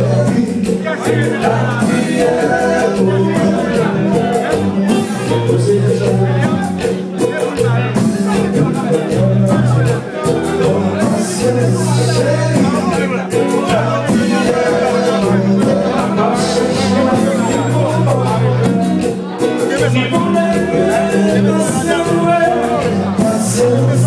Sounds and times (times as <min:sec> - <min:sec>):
Music: 0:00.0 - 0:24.0
Speech: 0:00.0 - 0:24.0.